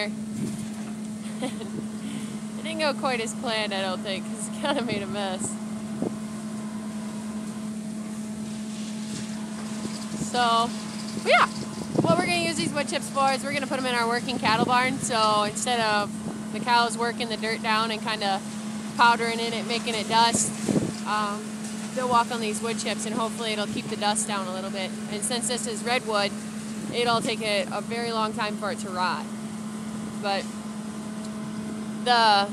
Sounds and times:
Speech: 0:02.6 - 0:05.6, 0:10.2 - 0:10.7, 0:11.3 - 0:11.5, 0:12.1 - 0:18.4, 0:19.0 - 0:20.5, 0:21.1 - 0:21.4, 0:22.0 - 0:26.3, 0:26.9 - 0:29.2, 0:30.2 - 0:30.4, 0:32.1 - 0:32.5.

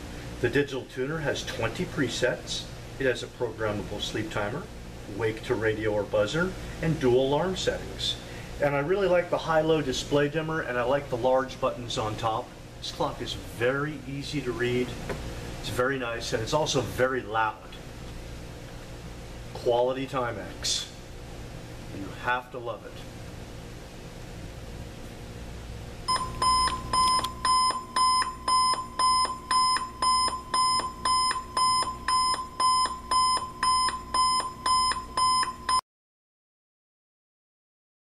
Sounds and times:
Alarm clock: 0:26.1 - 0:35.8.

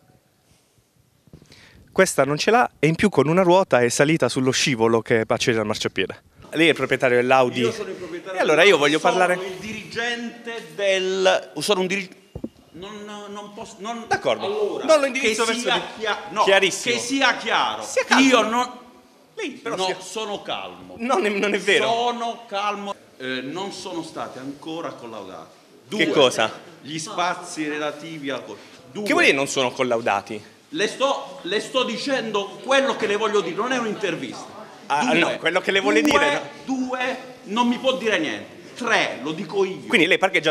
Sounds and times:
Speech: 0:02.0 - 0:12.1, 0:19.4 - 0:40.5.

